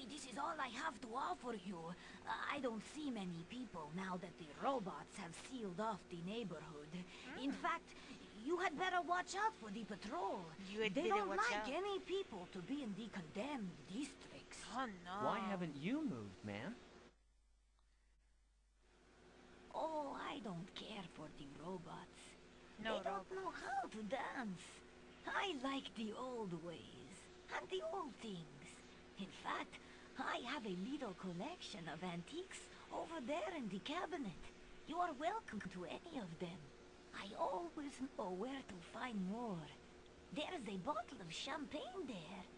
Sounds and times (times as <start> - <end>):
Speech: 0.0 - 16.8, 19.8 - 42.5.